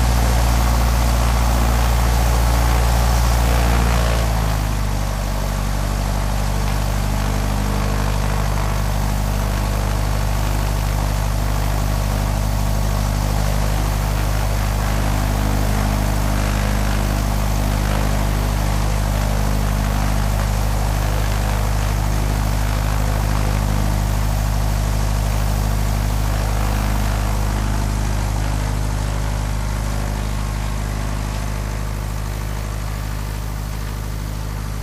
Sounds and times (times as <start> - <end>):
Heavy engine (low frequency): 0.0 - 34.8
Vehicle: 0.0 - 34.8.